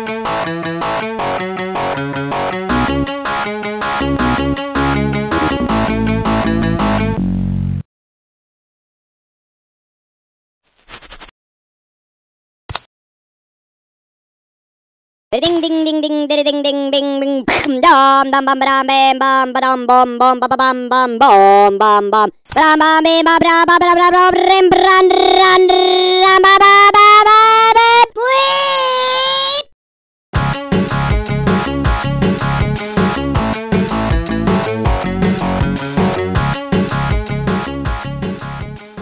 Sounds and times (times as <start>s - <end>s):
Music: 0.0s - 7.8s, 30.4s - 39.0s
Speech: 15.4s - 29.7s.